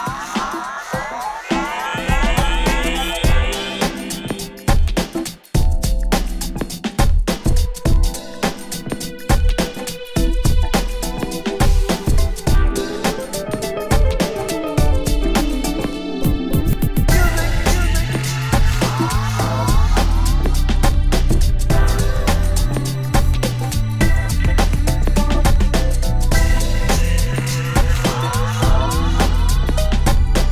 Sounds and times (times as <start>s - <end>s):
Music: 0.0s - 30.5s.